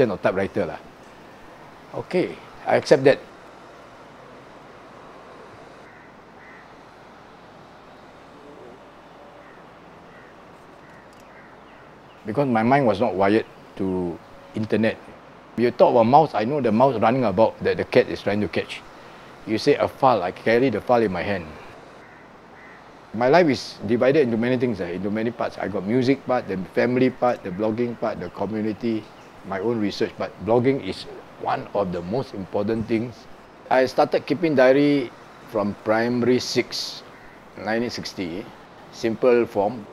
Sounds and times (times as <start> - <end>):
Speech: 0.0 - 0.8, 2.0 - 3.2, 12.3 - 18.8, 19.5 - 21.6, 23.2 - 39.9.